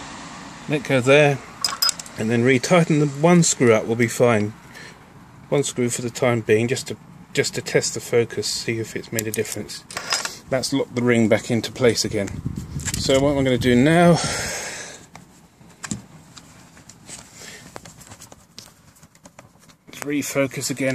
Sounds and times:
Speech: 0:00.7 - 0:01.4, 0:02.2 - 0:04.6, 0:05.5 - 0:09.9, 0:10.5 - 0:12.4, 0:13.0 - 0:14.3, 0:19.9 - 0:20.9.

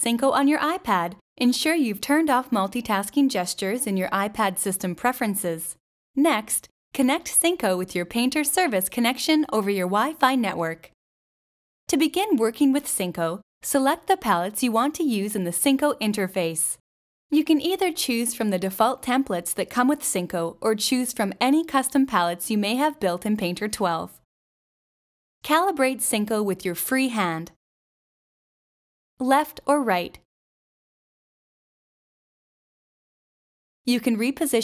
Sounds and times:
Speech: 0:00.0 - 0:11.0, 0:11.9 - 0:16.8, 0:17.4 - 0:24.2, 0:25.5 - 0:27.6, 0:29.2 - 0:30.2, 0:33.9 - 0:34.6.

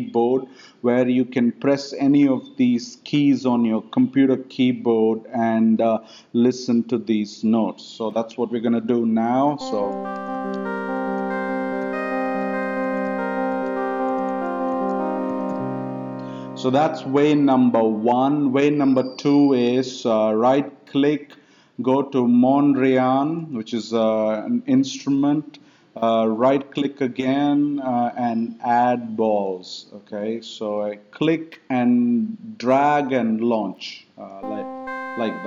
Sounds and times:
Speech: 0:00.0 - 0:10.0, 0:16.6 - 0:35.4
Music: 0:09.6 - 0:18.0, 0:34.4 - 0:35.4.

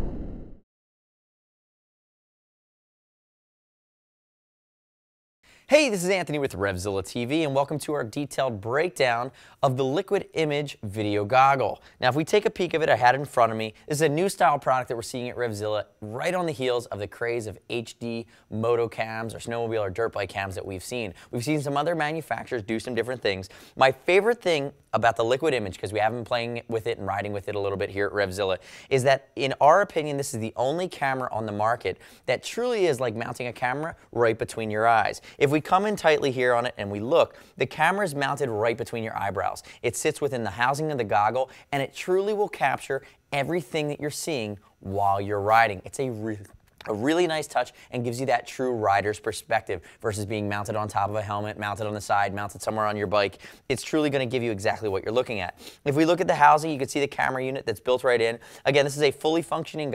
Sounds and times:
Speech: 0:05.7 - 0:59.9.

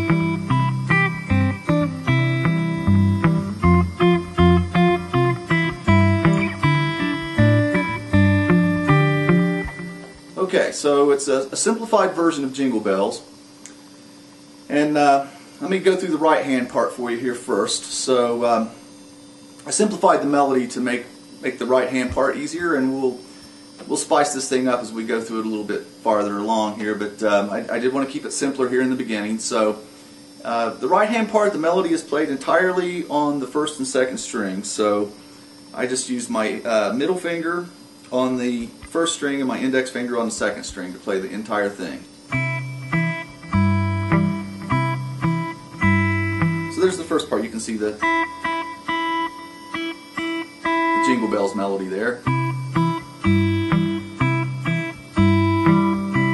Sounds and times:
Electric guitar: 0:00.0 - 0:10.4, 0:42.3 - 0:56.3
Speech: 0:10.4 - 0:13.3, 0:14.7 - 0:18.8, 0:19.6 - 0:23.2, 0:23.8 - 0:29.8, 0:30.4 - 0:35.2, 0:35.8 - 0:42.1, 0:46.7 - 0:48.0, 0:51.0 - 0:52.2.

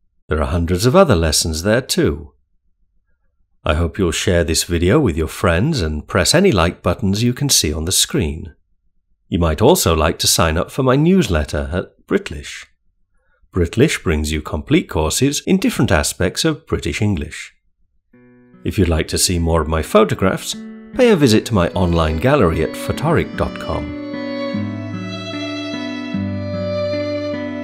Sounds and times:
Speech: 0:00.3 - 0:02.3, 0:03.6 - 0:08.6, 0:09.3 - 0:12.7, 0:13.6 - 0:17.6, 0:18.7 - 0:24.0.

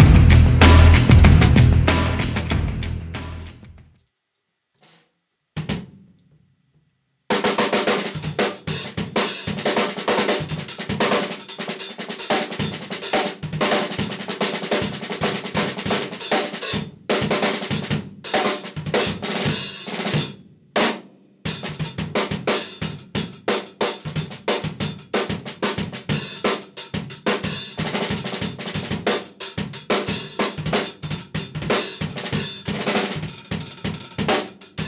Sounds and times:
Drum kit: 0:00.0 - 0:03.9, 0:05.6 - 0:06.1, 0:07.3 - 0:34.8.

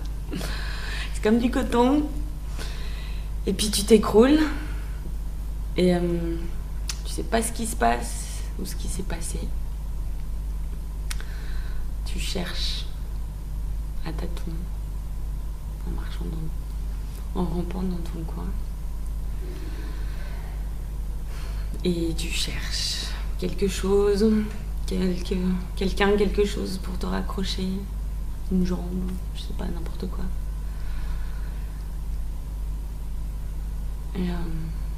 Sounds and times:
Narration, monologue: 0:00.0 - 0:34.9.

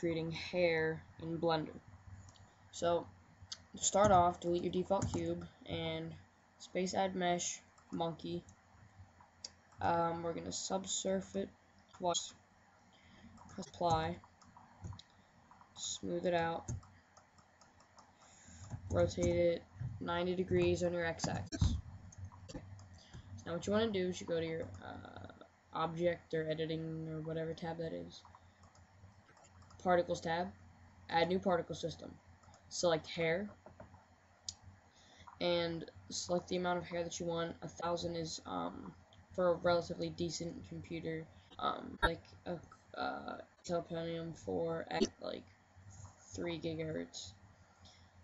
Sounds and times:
Speech: 0:00.0 - 0:01.8, 0:02.7 - 0:08.5, 0:09.8 - 0:12.4, 0:13.6 - 0:14.2, 0:15.8 - 0:16.8, 0:18.9 - 0:21.8, 0:23.4 - 0:28.3, 0:29.8 - 0:33.6, 0:35.4 - 0:45.5, 0:46.3 - 0:47.4.

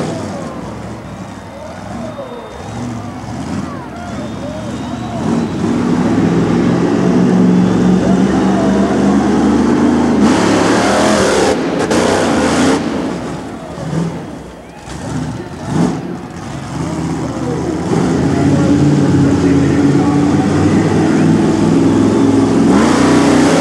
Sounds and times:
Vehicle: 0:00.0 - 0:23.6.

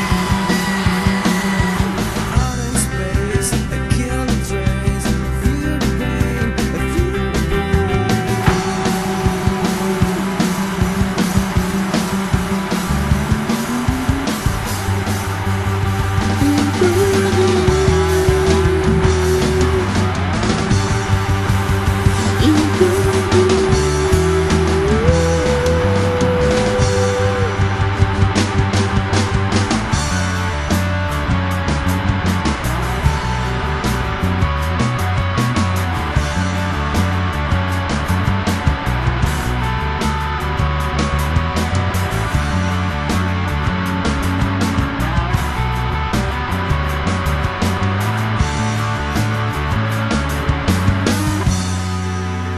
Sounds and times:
Psychedelic rock: 0:00.0 - 0:52.5.

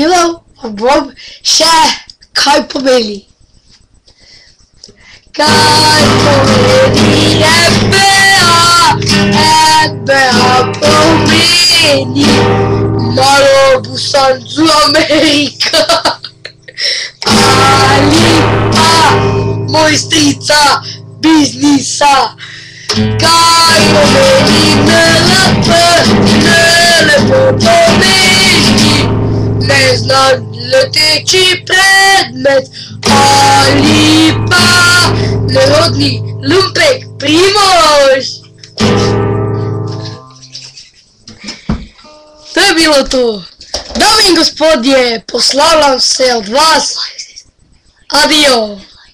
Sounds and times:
Guitar: 0:00.0 - 0:49.1.

